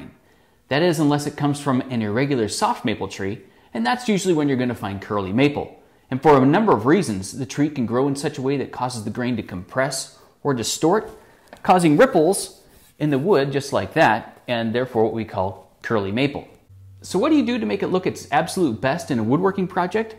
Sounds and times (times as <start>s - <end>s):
Speech: 0.0s - 20.1s.